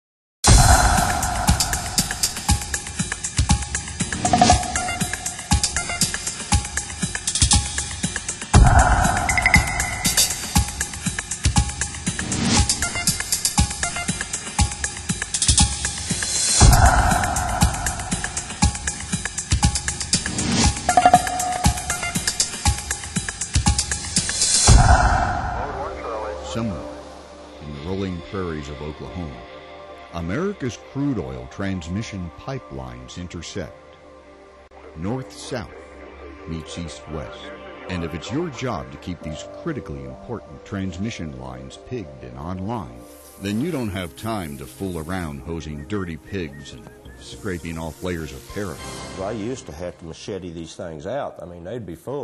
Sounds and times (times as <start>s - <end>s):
Music: 0.4s - 52.2s
Speech: 25.6s - 27.0s, 27.6s - 29.4s, 30.1s - 33.8s, 34.9s - 52.2s.